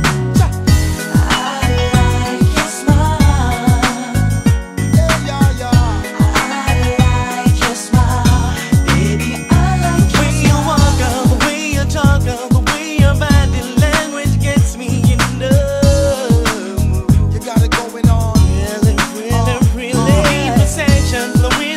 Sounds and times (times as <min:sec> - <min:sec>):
Pop music: 0:00.0 - 0:21.7
Rhythm and blues: 0:00.0 - 0:21.7
Singing: 0:01.1 - 0:04.0, 0:05.3 - 0:14.9, 0:17.4 - 0:21.7.